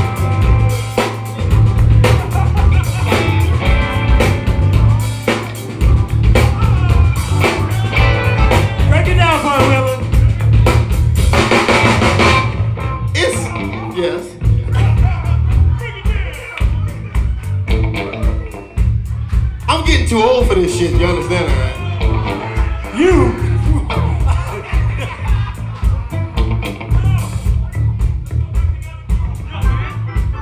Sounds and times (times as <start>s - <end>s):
Music: 0.0s - 30.4s
Speech: 8.9s - 10.0s, 13.2s - 17.1s, 19.7s - 22.0s, 22.9s - 24.7s.